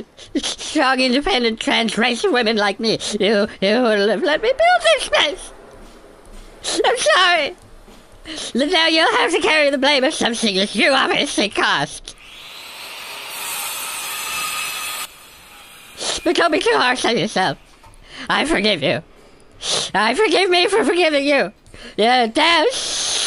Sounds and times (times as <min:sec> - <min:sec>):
Speech: 0:00.0 - 0:05.5, 0:06.7 - 0:07.6, 0:08.4 - 0:12.1, 0:16.1 - 0:17.6, 0:18.2 - 0:19.0, 0:19.8 - 0:23.0.